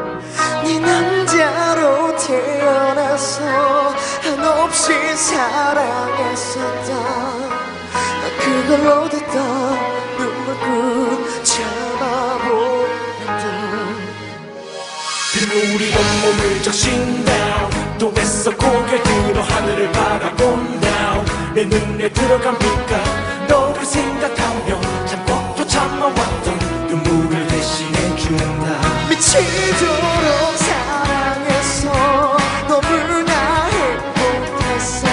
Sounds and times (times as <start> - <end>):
Singing: 15.4 - 35.1.